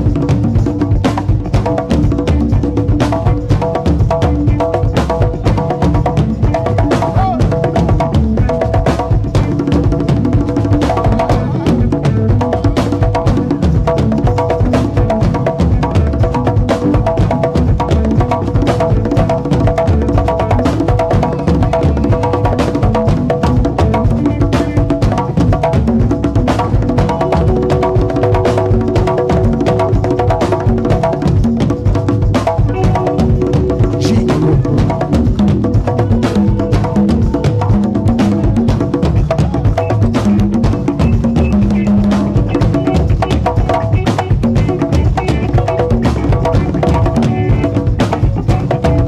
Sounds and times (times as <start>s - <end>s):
Speech: 7.1s - 7.4s, 33.9s - 34.9s.